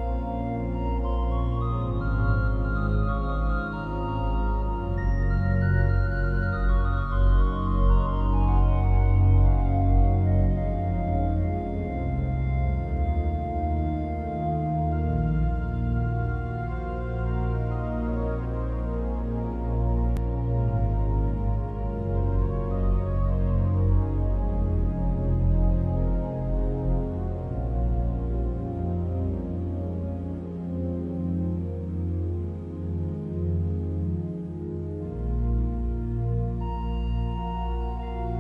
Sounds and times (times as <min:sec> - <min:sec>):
Music: 0:00.0 - 0:38.4.